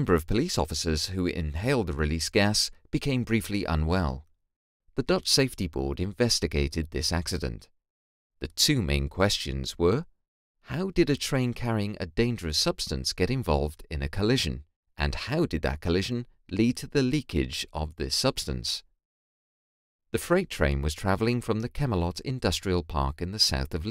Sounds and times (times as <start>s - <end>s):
Speech: 0.0s - 4.2s, 5.0s - 7.7s, 8.4s - 10.1s, 10.7s - 18.9s, 20.2s - 23.9s.